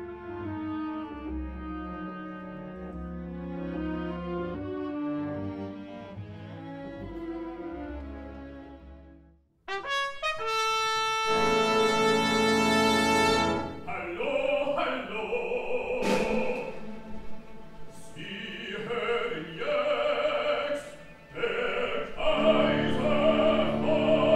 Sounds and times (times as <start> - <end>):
Music: 0.0 - 24.3.